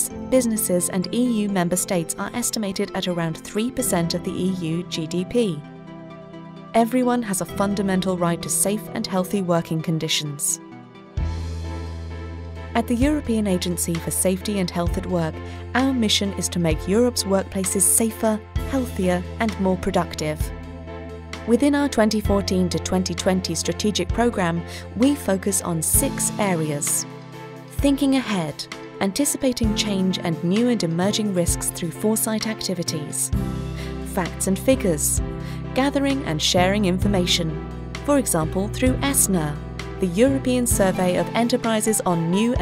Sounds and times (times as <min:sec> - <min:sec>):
Speech: 0:00.0 - 0:05.7, 0:06.8 - 0:10.6, 0:12.8 - 0:20.5, 0:21.5 - 0:27.0, 0:27.8 - 0:33.4, 0:34.1 - 0:42.6
Music: 0:00.0 - 0:42.6.